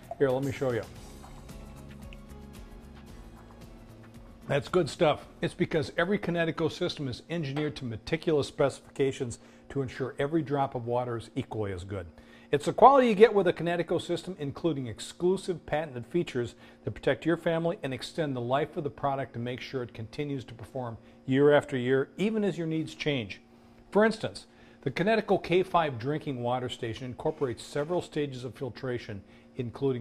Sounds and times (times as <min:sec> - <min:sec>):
Speech: 0:00.1 - 0:00.9, 0:04.5 - 0:30.0.